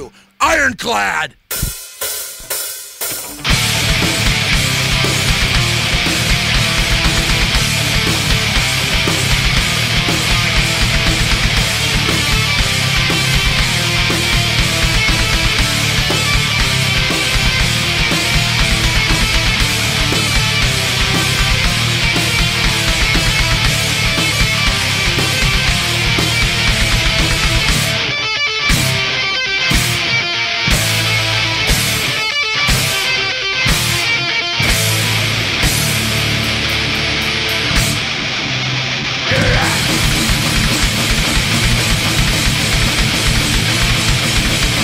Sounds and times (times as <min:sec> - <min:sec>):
Independent music: 0:01.5 - 0:44.8.